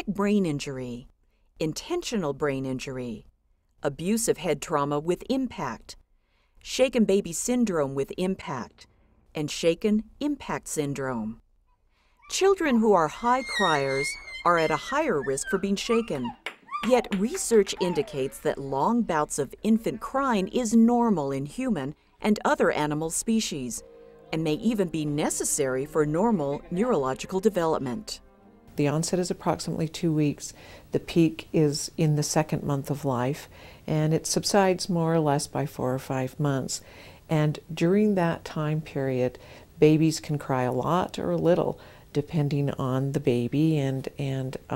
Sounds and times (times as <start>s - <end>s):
Speech: 0.0s - 6.0s, 6.7s - 11.4s, 12.3s - 28.2s, 28.8s - 44.7s
Baby cry, infant cry: 12.2s - 18.6s.